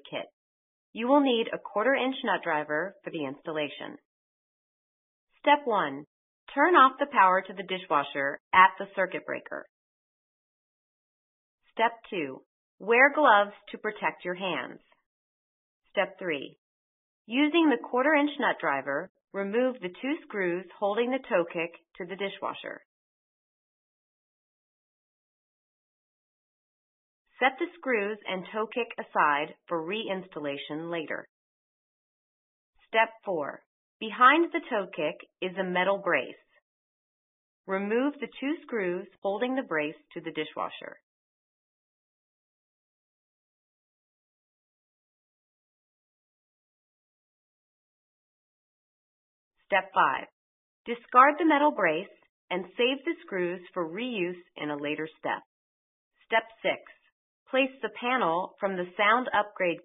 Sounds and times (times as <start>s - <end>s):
Speech: 0.0s - 0.3s, 1.0s - 4.0s, 5.5s - 9.7s, 11.8s - 14.8s, 16.0s - 16.5s, 17.3s - 22.8s, 27.4s - 31.3s, 32.9s - 36.4s, 37.7s - 41.0s, 49.7s - 50.3s, 50.9s - 55.5s, 56.3s - 56.8s, 57.6s - 59.8s.